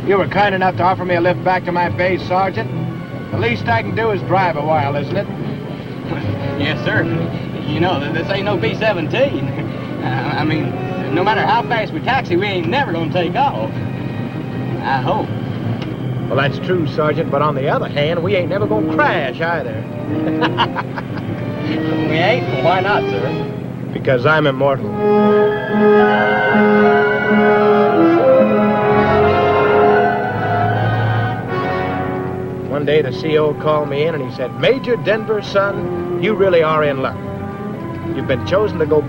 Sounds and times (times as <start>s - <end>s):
Music: 0.0s - 39.0s.